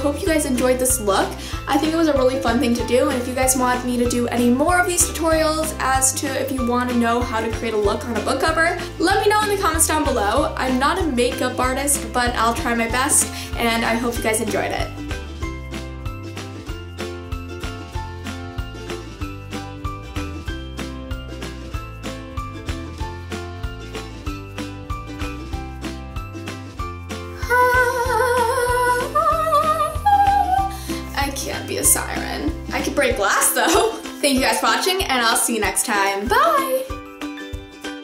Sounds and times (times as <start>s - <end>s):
Music: 0.0s - 38.0s.